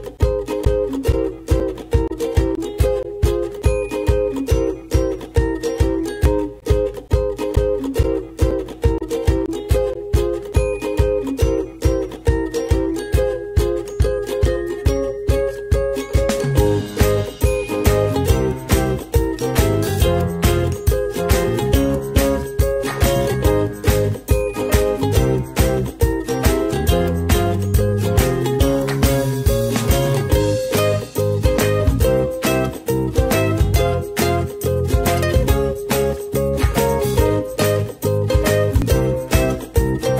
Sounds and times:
Music: 0:00.0 - 0:40.1.

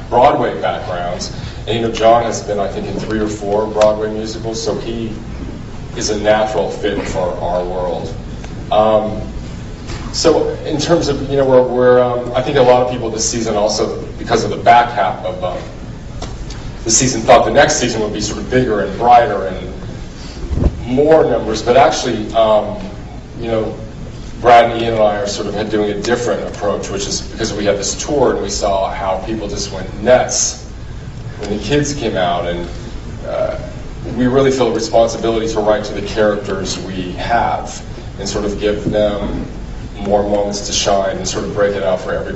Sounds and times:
Speech: 0:00.0 - 0:05.2, 0:06.0 - 0:09.4, 0:10.1 - 0:15.8, 0:16.8 - 0:19.8, 0:20.8 - 0:30.7, 0:31.4 - 0:42.3.

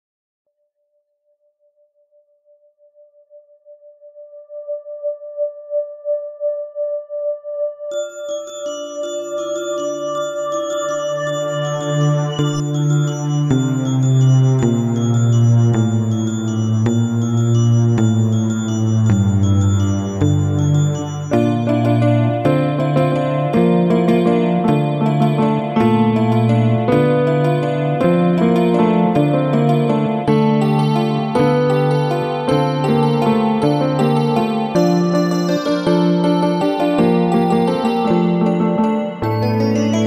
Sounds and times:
Music: 0:00.5 - 0:40.0.

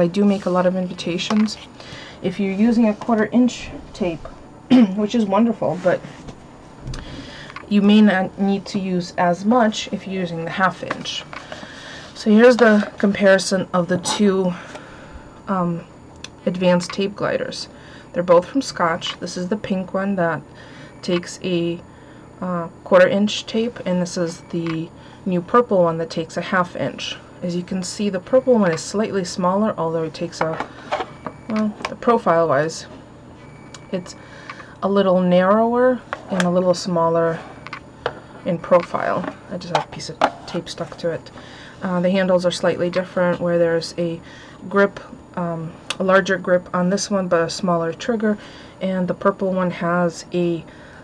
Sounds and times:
Speech: 0:00.0 - 0:06.1, 0:07.7 - 0:11.3, 0:12.2 - 0:14.6, 0:15.5 - 0:21.8, 0:22.4 - 0:30.6, 0:31.5 - 0:32.9, 0:33.9 - 0:34.2, 0:34.8 - 0:37.5, 0:38.4 - 0:50.7
Inside, small room: 0:00.0 - 0:51.0.

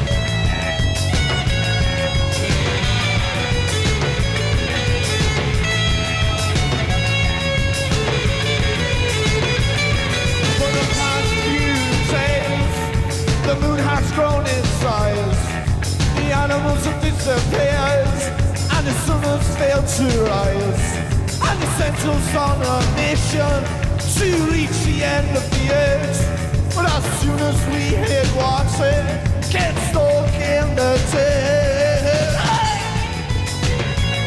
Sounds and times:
Music: 0:00.0 - 0:34.2.

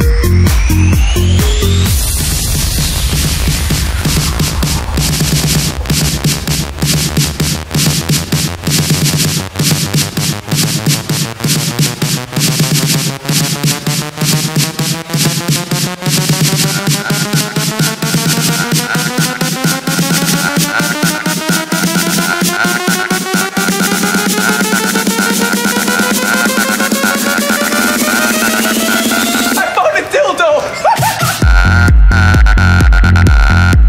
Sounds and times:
Electronic dance music: 0:00.0 - 0:33.8.

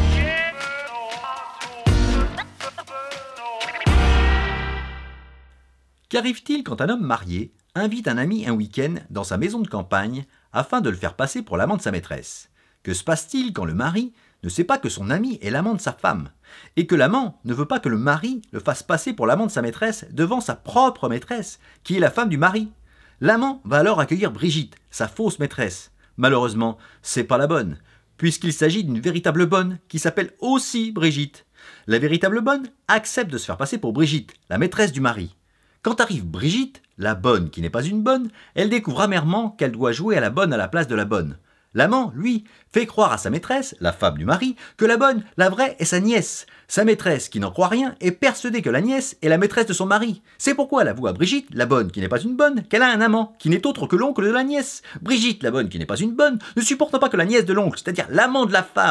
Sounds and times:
Speech: 0:02.6 - 0:04.0, 0:06.1 - 0:58.9.

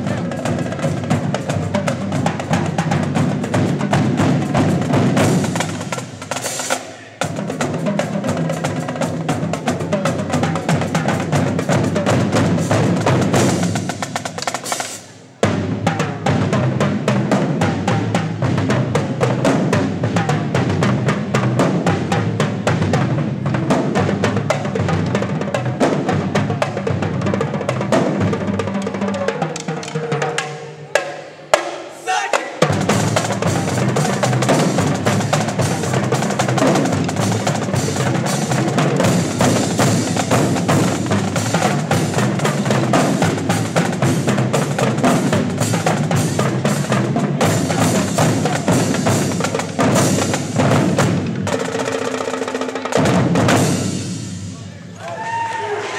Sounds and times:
Percussion: 0:00.0 - 0:55.9.

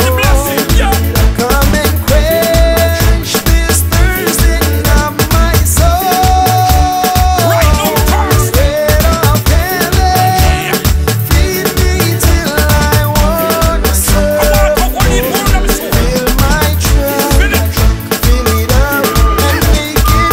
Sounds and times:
Afrobeat: 0:00.0 - 0:20.3.

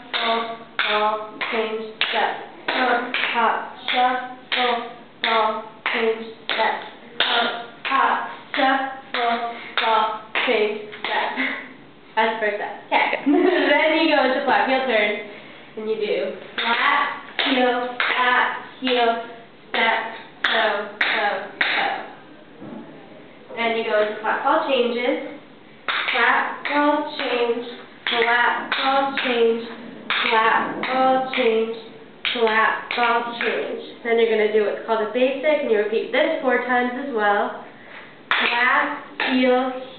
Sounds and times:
Speech: 0:00.0 - 0:11.6, 0:12.2 - 0:25.4, 0:26.0 - 0:37.6, 0:38.3 - 0:39.9.

